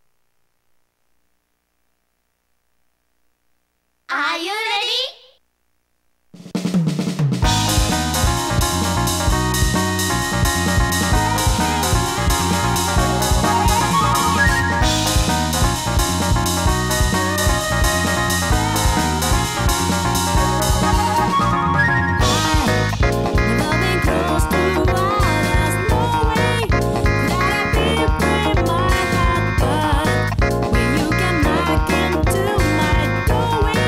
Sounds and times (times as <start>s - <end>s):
Jingle (music): 7.4s - 33.8s.